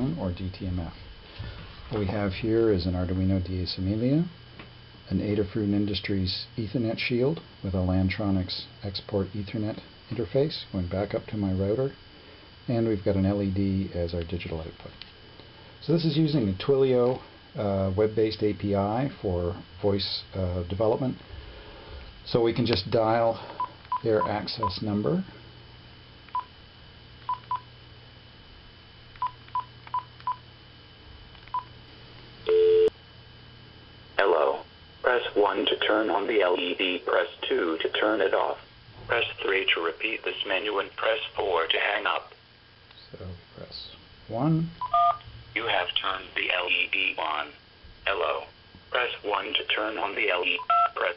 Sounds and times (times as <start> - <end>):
Speech: 0.0 - 1.0, 1.9 - 4.4, 5.0 - 12.0, 12.7 - 15.0, 15.8 - 21.2, 22.2 - 25.3, 34.2 - 42.4, 43.0 - 44.8, 45.6 - 51.1.